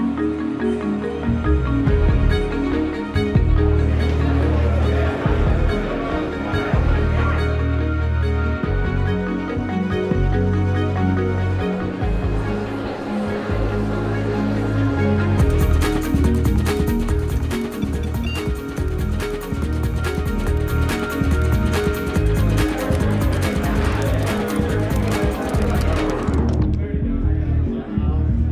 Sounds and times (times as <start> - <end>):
Music: 0.0 - 28.5.